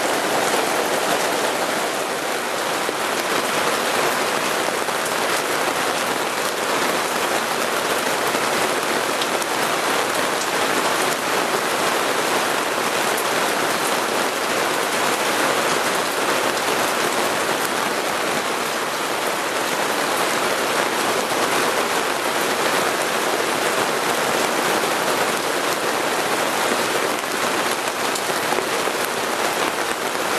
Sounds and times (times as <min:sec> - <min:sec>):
Rain on surface: 0:00.0 - 0:30.3.